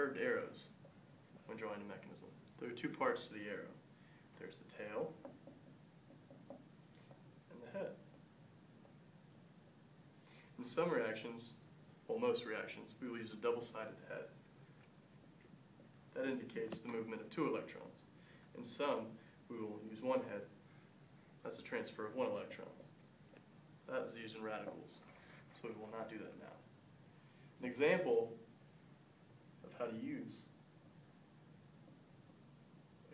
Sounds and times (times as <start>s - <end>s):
Speech: 0.0s - 0.8s, 1.4s - 3.8s, 4.4s - 5.2s, 7.5s - 8.1s, 10.6s - 14.4s, 16.1s - 20.6s, 21.4s - 22.9s, 23.9s - 26.7s, 27.6s - 28.5s, 29.6s - 30.6s.